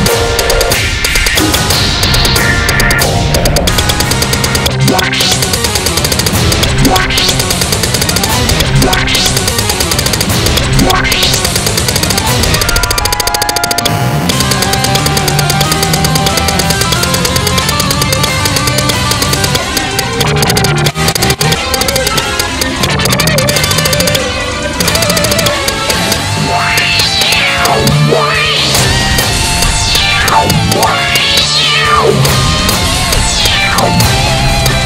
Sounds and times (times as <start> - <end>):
Music: 0.0 - 34.8.